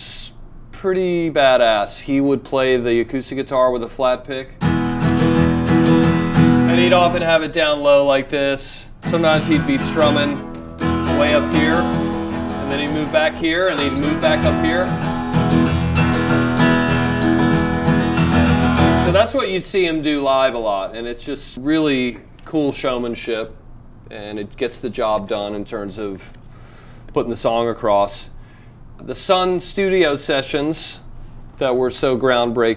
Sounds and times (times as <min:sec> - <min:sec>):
Speech: 0:00.0 - 0:04.6, 0:06.7 - 0:10.4, 0:11.1 - 0:12.0, 0:12.6 - 0:15.0, 0:19.1 - 0:26.4, 0:27.2 - 0:28.4, 0:29.0 - 0:32.7
Strum: 0:04.6 - 0:07.6, 0:09.0 - 0:19.4
Acoustic guitar: 0:04.6 - 0:08.0, 0:08.9 - 0:19.4.